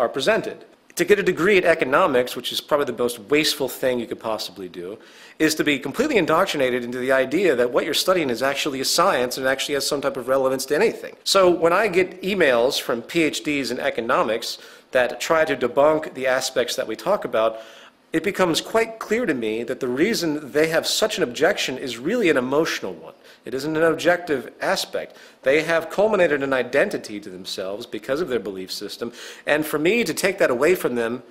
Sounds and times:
Speech: 0.0s - 17.6s, 18.2s - 31.3s.

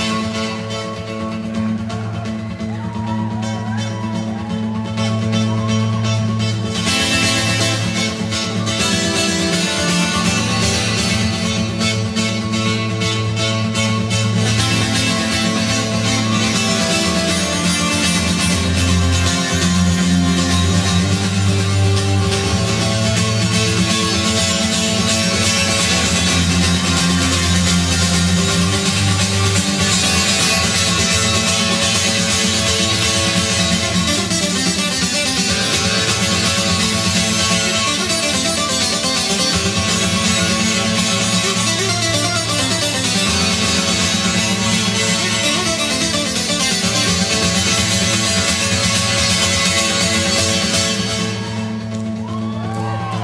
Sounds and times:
Guitar: 0.0s - 53.2s.

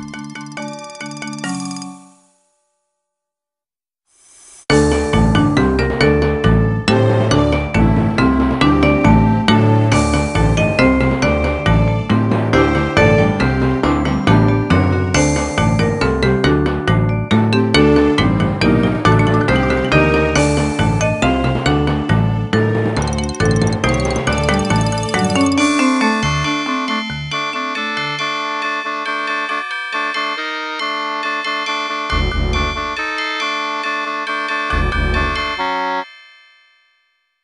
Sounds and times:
Percussion: 19.1s - 26.4s.

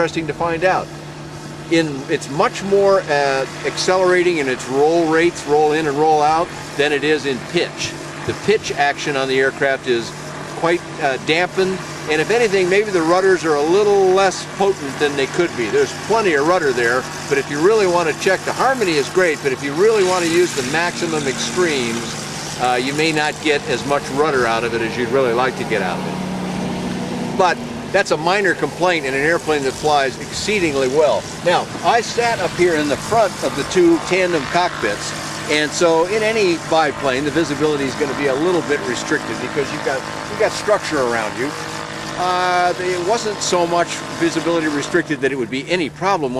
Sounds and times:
Speech: 0.0s - 0.9s, 1.7s - 26.1s, 27.4s - 41.6s, 42.2s - 46.3s
Outside, urban or manmade: 0.0s - 46.3s
Vehicle: 0.0s - 46.3s.

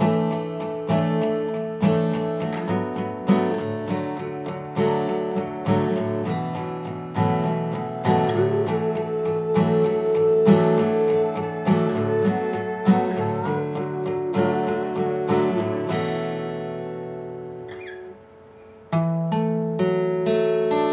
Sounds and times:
Music: 0.0s - 20.9s.

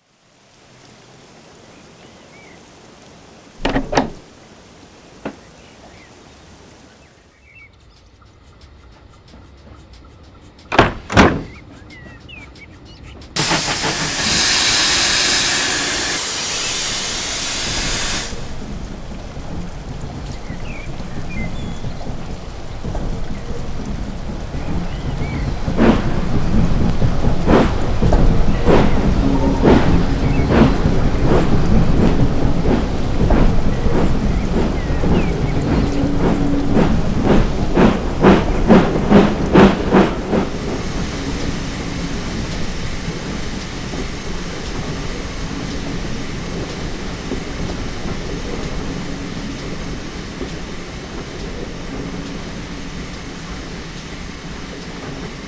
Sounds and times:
Hiss: 13.3s - 19.7s, 24.7s - 55.4s.

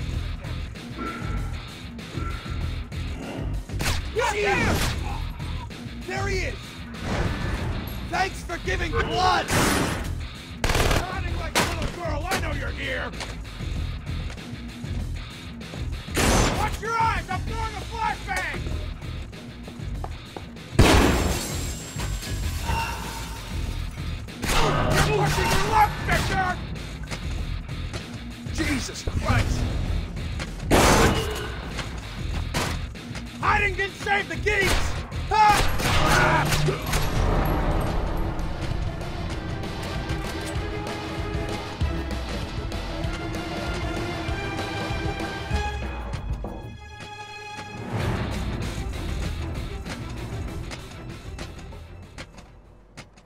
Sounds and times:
Music: 0.0s - 53.2s
Speech: 6.1s - 6.6s, 8.1s - 9.5s, 11.0s - 13.2s, 16.6s - 18.6s, 24.9s - 26.6s, 28.5s - 29.6s, 33.4s - 36.8s.

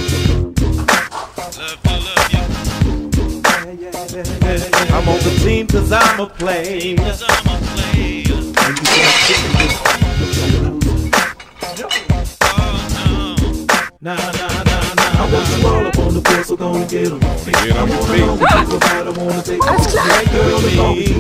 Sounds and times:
Music: 0.0s - 21.2s
Speech: 19.6s - 20.3s.

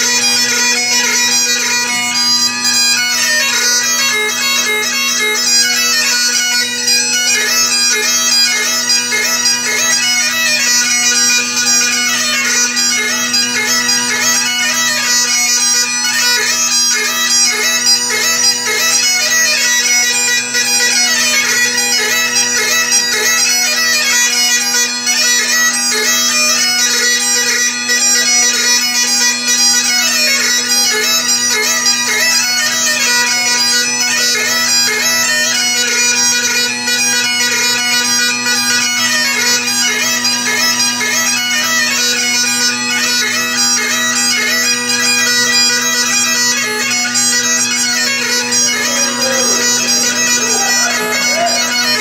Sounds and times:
Bagpipes: 0.0s - 52.0s.

